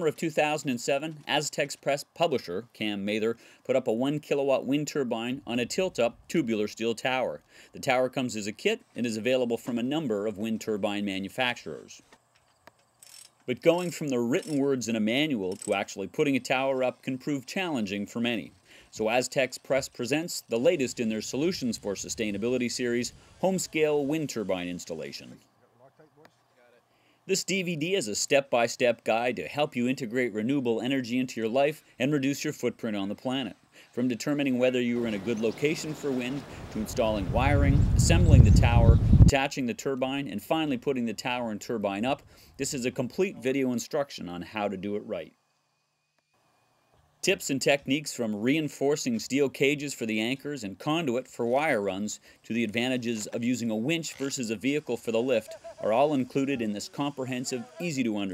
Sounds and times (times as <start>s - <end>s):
Speech: 0.0s - 12.0s, 13.5s - 45.3s, 47.2s - 58.3s.